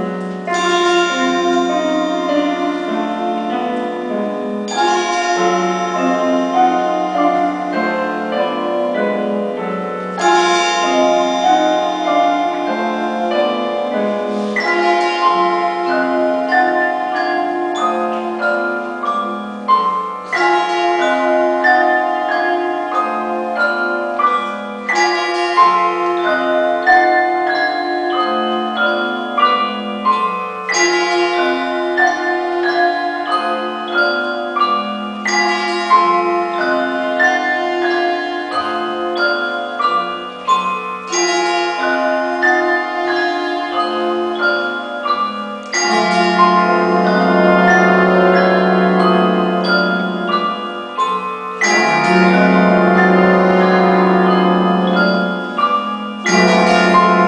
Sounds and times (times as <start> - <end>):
Orchestra: 0.0 - 57.2.